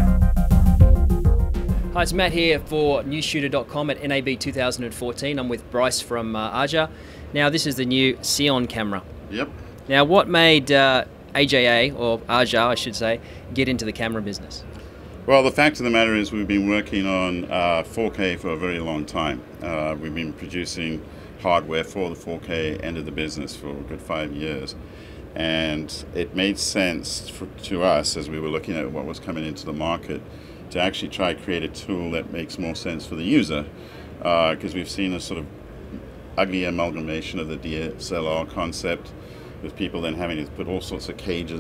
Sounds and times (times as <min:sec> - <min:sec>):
Speech: 0:02.0 - 0:14.7, 0:15.3 - 0:24.8, 0:25.4 - 0:35.5, 0:36.4 - 0:41.6.